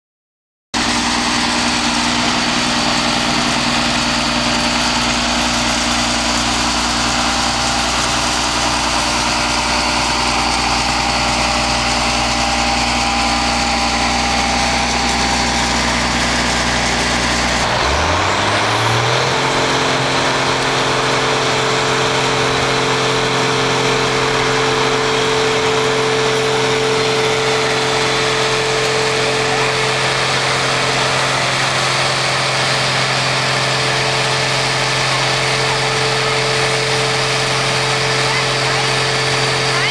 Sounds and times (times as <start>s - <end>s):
Vehicle: 0.8s - 39.9s.